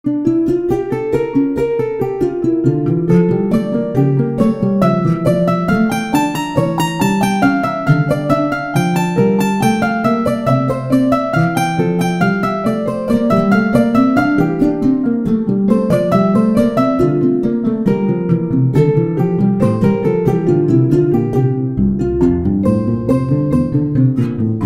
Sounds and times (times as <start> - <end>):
Harp: 0.0 - 24.6.